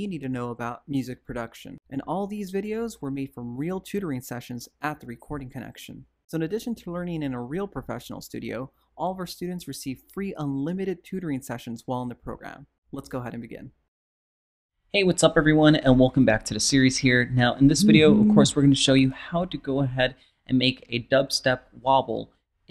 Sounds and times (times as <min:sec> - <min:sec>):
Speech: 0:00.0 - 0:13.8, 0:15.0 - 0:22.3.